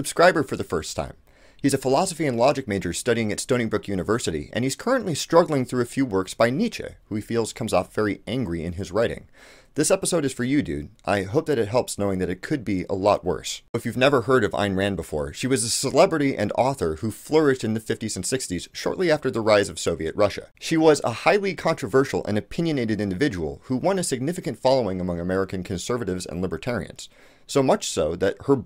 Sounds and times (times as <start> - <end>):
Speech: 0.0 - 28.6.